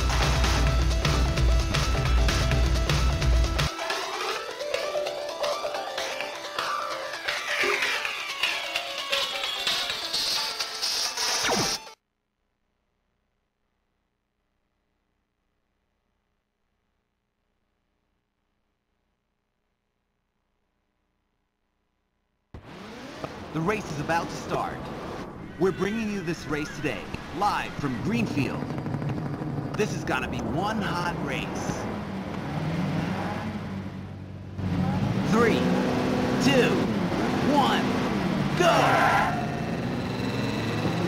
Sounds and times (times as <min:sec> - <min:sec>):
Speech: 0:23.6 - 0:24.8, 0:25.6 - 0:28.7, 0:29.8 - 0:31.8, 0:34.8 - 0:35.7, 0:36.4 - 0:37.9.